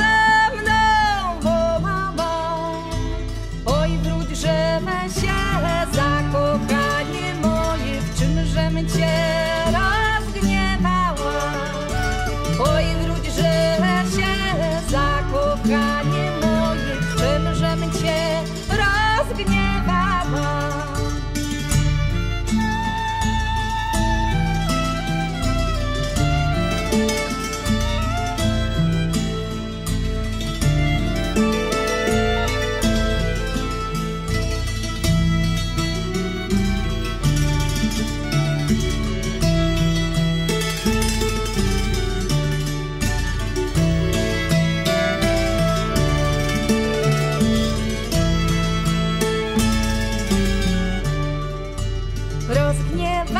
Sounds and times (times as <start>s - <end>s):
Music: 0.0s - 53.4s.